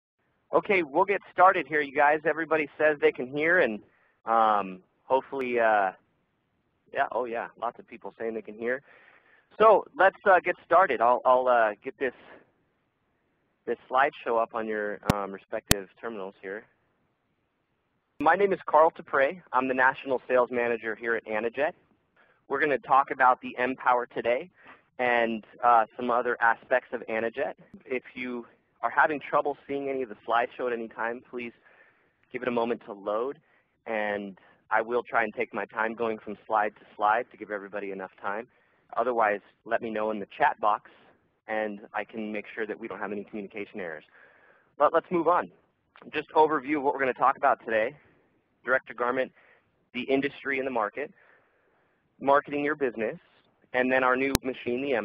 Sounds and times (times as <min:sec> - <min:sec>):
Speech: 0:00.5 - 0:06.0, 0:06.9 - 0:08.9, 0:09.5 - 0:12.4, 0:13.6 - 0:16.7, 0:18.2 - 0:21.8, 0:22.5 - 0:31.6, 0:32.3 - 0:44.2, 0:44.8 - 0:48.0, 0:48.6 - 0:51.2, 0:52.2 - 0:55.0.